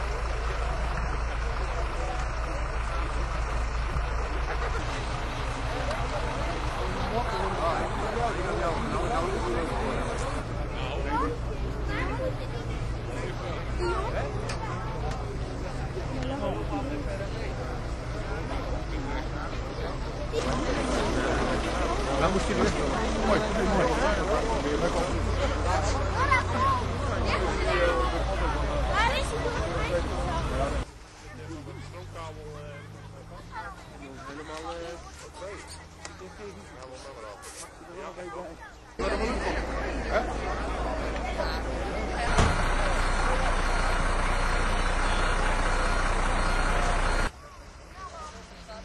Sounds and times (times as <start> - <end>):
Vehicle: 0.0 - 48.8.